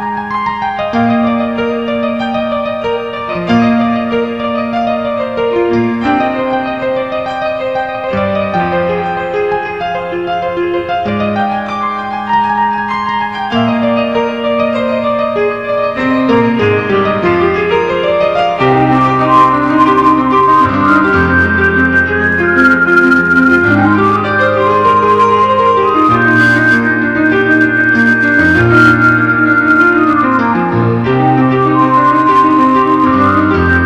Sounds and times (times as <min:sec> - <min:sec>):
Piano: 0:00.0 - 0:33.8.